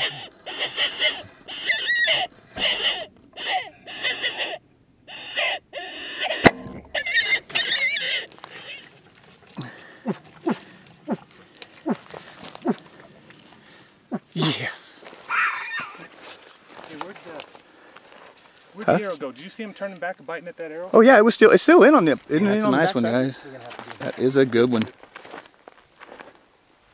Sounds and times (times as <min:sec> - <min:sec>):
Animal: 0:00.0 - 0:14.3
Outside, rural or natural: 0:00.0 - 0:26.9.